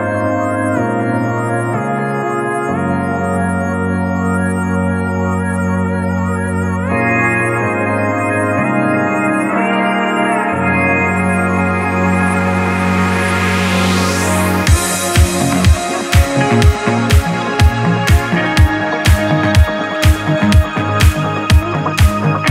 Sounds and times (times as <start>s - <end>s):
Hammond organ: 0.0s - 22.5s.